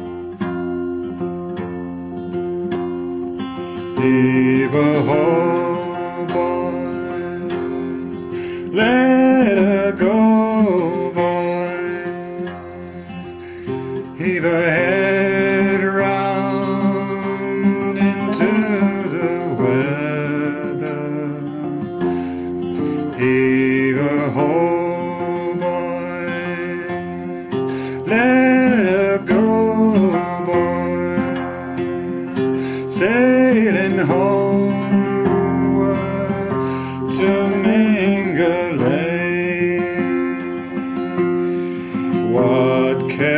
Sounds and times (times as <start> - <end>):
Music: 0.0 - 43.3.